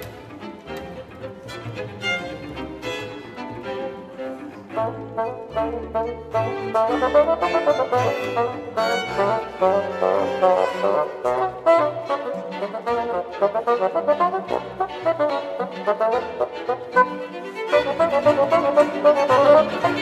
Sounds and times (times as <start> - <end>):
Classical music: 0.0 - 20.0
Violin, fiddle: 0.0 - 20.0
Trumpet: 4.7 - 20.0.